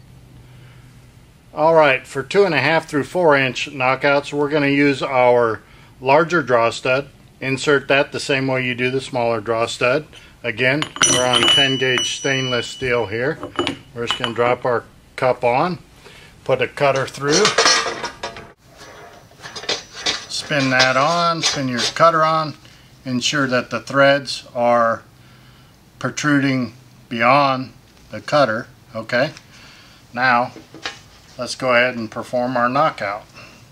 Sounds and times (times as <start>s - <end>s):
Speech: 1.6s - 13.4s, 14.0s - 15.8s, 16.5s - 17.6s, 20.3s - 25.1s, 26.0s - 29.4s, 30.1s - 30.6s, 31.4s - 33.3s
Tools: 10.8s - 14.3s, 17.0s - 22.0s.